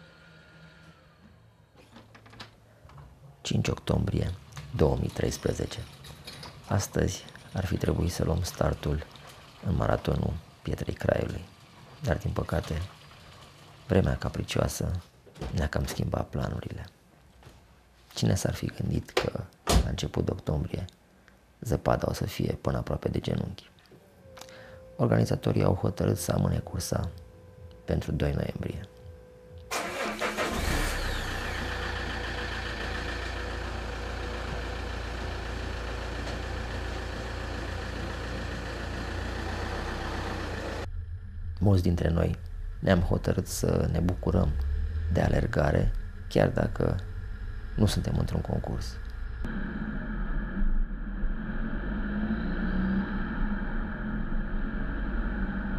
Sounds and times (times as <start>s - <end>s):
Speech: 3.4s - 6.0s, 6.7s - 12.9s, 13.9s - 17.0s, 18.1s - 21.0s, 21.6s - 23.7s, 25.0s - 27.2s, 27.9s - 28.9s, 41.6s - 47.0s, 47.8s - 49.0s.